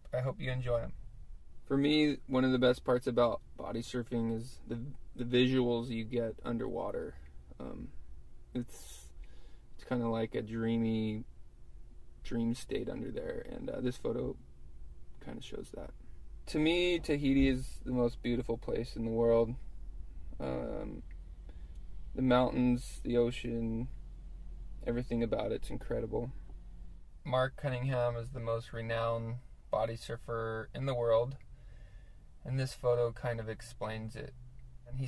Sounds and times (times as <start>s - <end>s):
Speech: 0.0s - 1.0s, 1.7s - 7.9s, 8.6s - 9.1s, 9.8s - 11.2s, 12.2s - 14.4s, 15.2s - 15.9s, 16.5s - 19.6s, 20.4s - 21.0s, 22.2s - 24.0s, 24.8s - 26.4s, 27.3s - 31.4s, 32.4s - 34.3s.